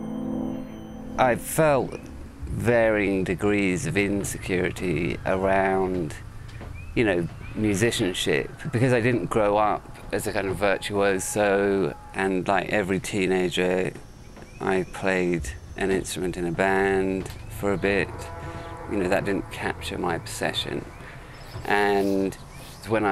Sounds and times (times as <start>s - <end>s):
Speech: 1.2s - 6.2s, 7.0s - 14.0s, 14.6s - 18.3s, 18.9s - 20.9s, 21.6s - 23.1s.